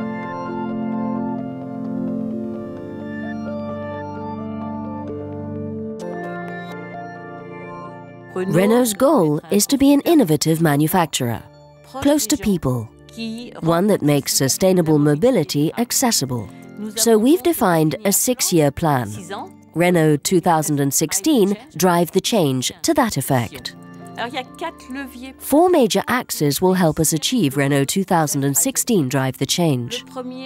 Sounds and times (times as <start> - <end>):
Music: 0.0 - 30.4
Speech: 8.4 - 30.4.